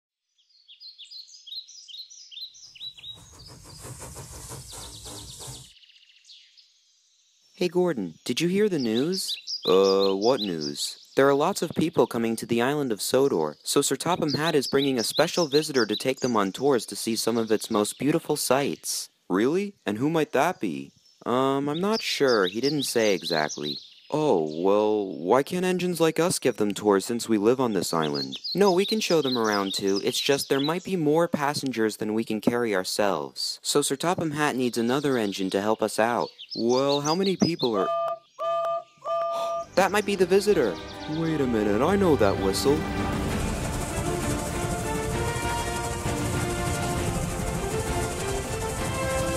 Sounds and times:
Speech: 7.6s - 38.0s, 39.8s - 42.9s
Music: 39.6s - 49.3s.

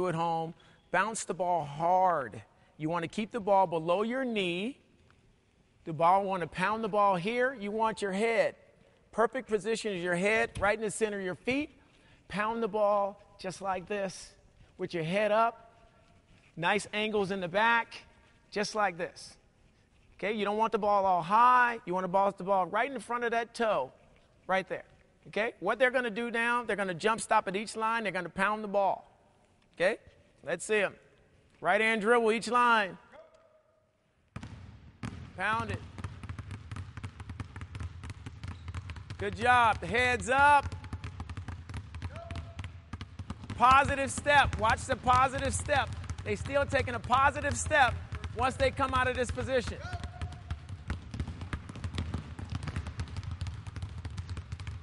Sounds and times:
Speech: 0.0s - 4.8s, 5.9s - 8.6s, 9.2s - 11.7s, 12.3s - 15.6s, 16.6s - 19.4s, 20.2s - 23.9s, 24.5s - 29.1s, 29.8s - 31.0s, 31.6s - 33.3s, 35.4s - 35.8s, 39.2s - 40.7s, 43.6s - 50.2s.

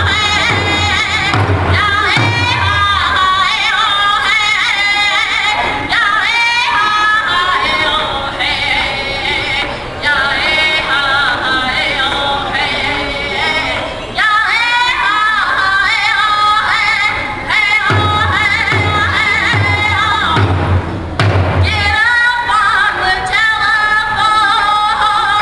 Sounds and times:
Female singing: 0.0s - 20.5s, 21.6s - 25.4s
Music: 0.0s - 25.4s.

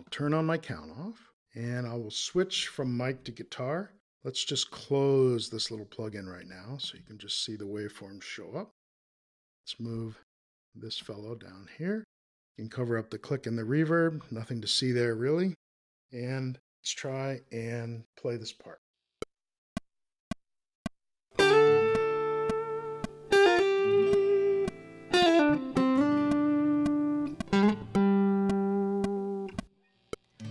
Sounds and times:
Speech: 0.0s - 8.8s, 9.7s - 10.2s, 10.8s - 15.6s, 16.2s - 18.8s
Electric guitar: 21.4s - 29.6s
Electronic tuner: 21.4s - 30.5s
Inside, small room: 21.4s - 30.5s.

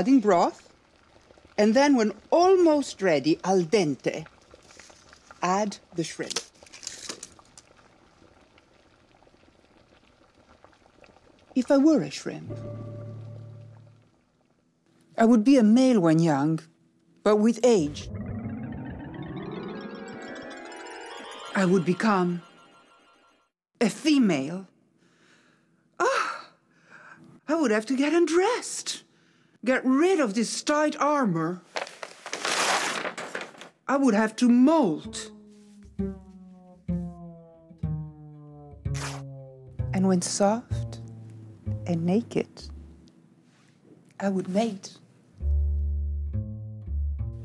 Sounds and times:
Speech: 0.0s - 0.6s, 1.6s - 4.2s, 5.4s - 6.4s, 11.6s - 12.5s, 15.2s - 18.1s, 21.6s - 22.4s, 23.8s - 24.7s, 27.5s - 31.6s, 33.9s - 35.3s, 40.0s - 41.0s, 41.9s - 42.7s, 44.2s - 45.0s
Music: 12.4s - 14.0s, 17.9s - 23.6s, 34.9s - 43.1s, 45.4s - 47.4s.

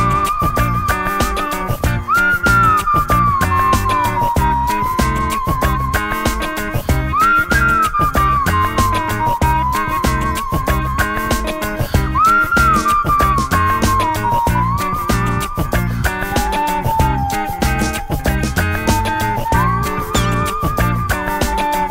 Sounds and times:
Music: 0.0s - 21.9s.

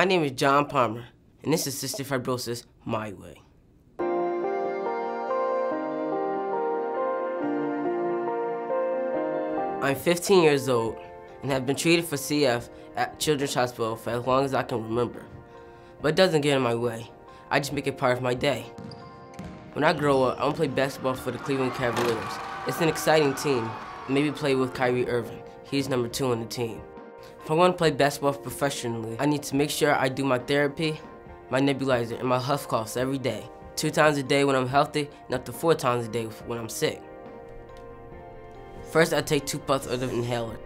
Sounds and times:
Speech: 0.0s - 3.5s, 9.8s - 15.3s, 16.0s - 18.7s, 19.8s - 26.8s, 27.4s - 37.0s, 38.9s - 40.6s
Music: 4.0s - 40.6s.

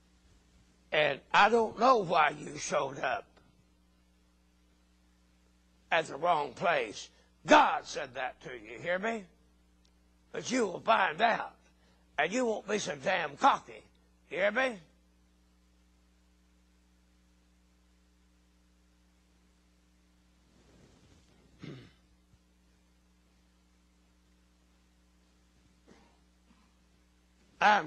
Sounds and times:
Speech: 0.9s - 3.3s, 5.9s - 9.3s, 10.3s - 11.6s, 12.2s - 15.0s, 27.6s - 27.8s.

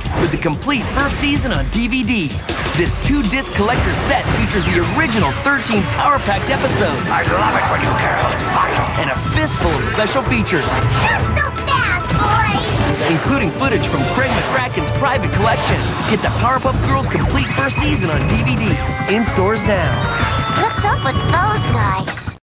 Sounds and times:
Music: 0.0s - 22.4s
Speech: 0.1s - 10.7s, 13.0s - 20.0s.

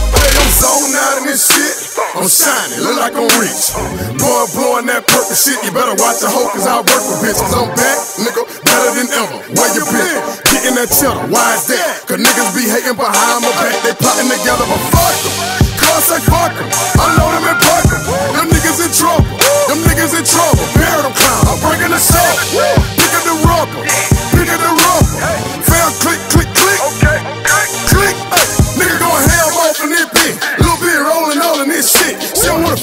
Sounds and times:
Music: 0.0s - 32.8s.

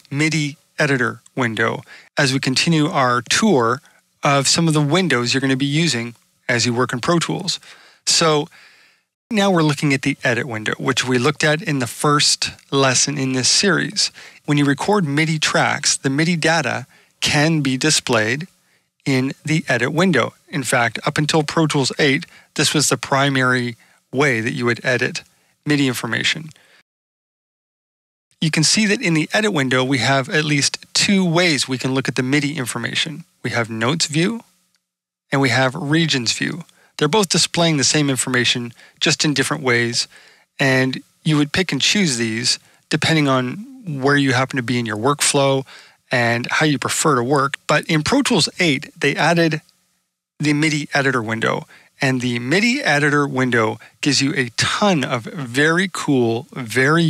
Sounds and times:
Speech: 0.0s - 8.5s, 9.3s - 26.6s, 28.4s - 34.5s, 35.3s - 49.6s, 50.4s - 57.0s.

